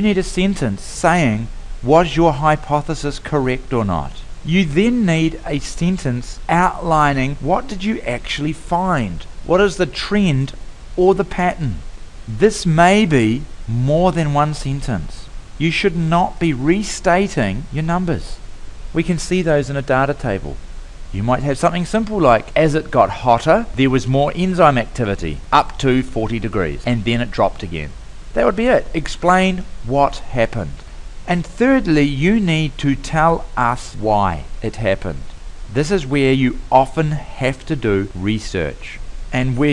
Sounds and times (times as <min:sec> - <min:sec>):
Speech: 0:00.0 - 0:18.4, 0:19.0 - 0:39.7.